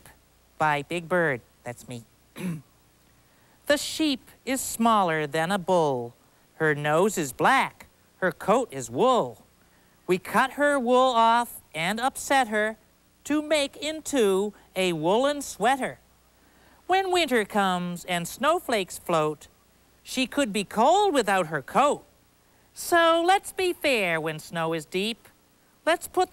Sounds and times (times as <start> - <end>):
Speech: 0.0 - 2.6, 3.7 - 9.5, 10.1 - 16.0, 16.9 - 22.1, 22.8 - 26.3.